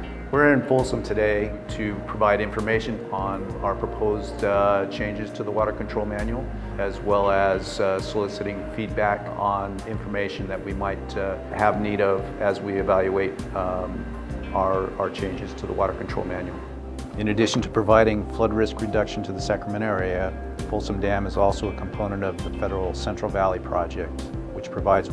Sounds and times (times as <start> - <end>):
Music: 0.0 - 25.1
Speech: 0.3 - 16.6, 17.2 - 25.1.